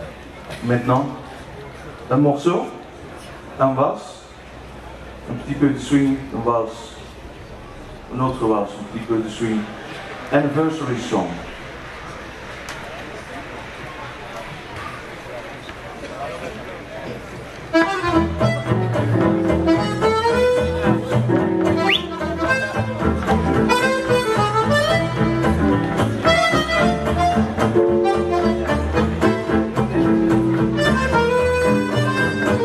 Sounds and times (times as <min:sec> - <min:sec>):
Speech: 0:00.0 - 0:04.4, 0:05.2 - 0:07.2, 0:08.1 - 0:11.5.